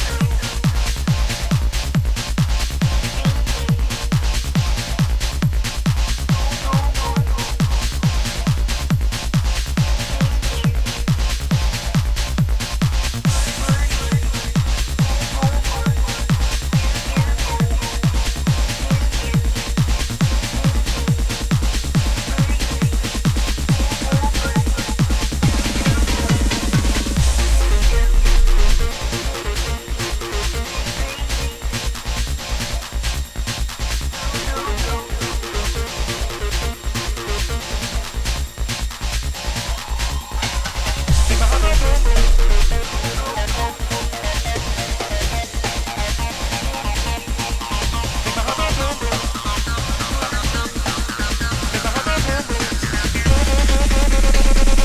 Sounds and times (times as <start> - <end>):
Trance music: 0.0 - 54.8.